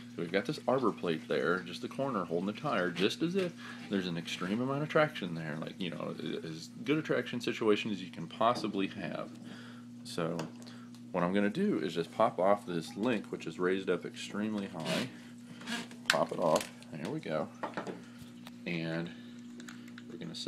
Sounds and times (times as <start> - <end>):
Speech: 0.2 - 9.3, 10.0 - 10.5, 11.1 - 15.1, 16.1 - 17.6, 18.6 - 19.2, 20.1 - 20.4.